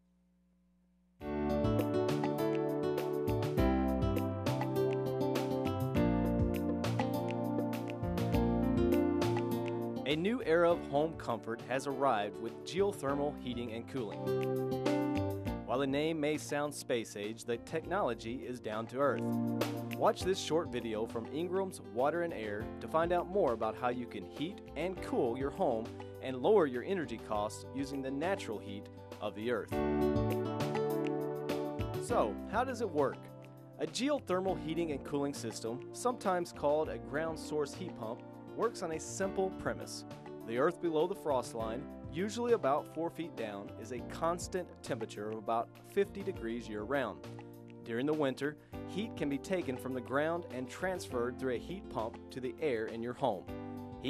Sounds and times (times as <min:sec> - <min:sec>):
Music: 0:01.2 - 0:54.1
Speech: 0:10.1 - 0:14.3, 0:15.7 - 0:19.3, 0:19.9 - 0:29.8, 0:32.0 - 0:47.2, 0:47.9 - 0:54.1.